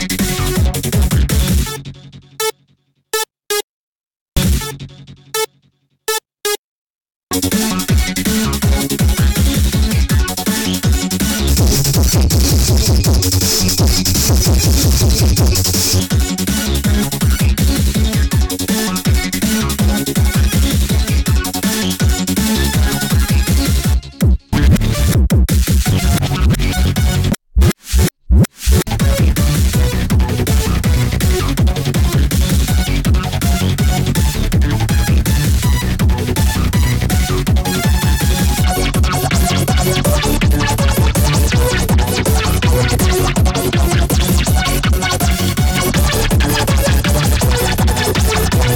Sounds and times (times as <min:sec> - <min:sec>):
Dubstep: 0:07.4 - 0:23.9, 0:24.6 - 0:48.7.